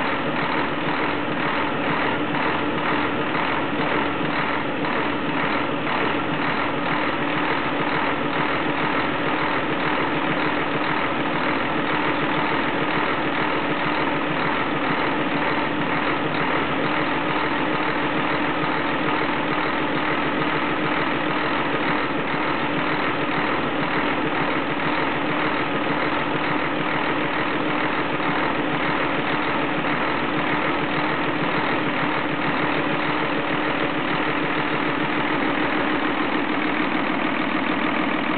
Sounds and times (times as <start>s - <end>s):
Engine: 0.0s - 38.3s
Vehicle: 0.0s - 38.3s.